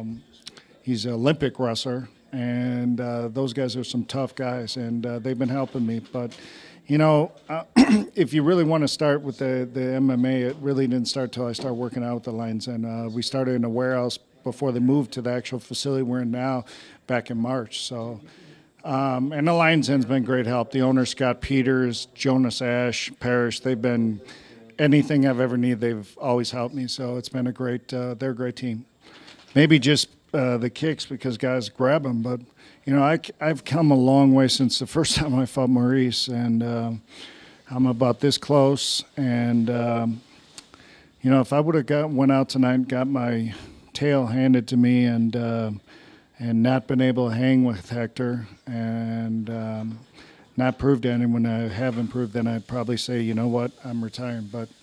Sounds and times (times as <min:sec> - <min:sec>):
Speech: 0:00.0 - 0:28.9, 0:29.5 - 0:37.1, 0:37.7 - 0:40.2, 0:41.2 - 0:45.8, 0:46.4 - 0:50.0, 0:50.6 - 0:54.8.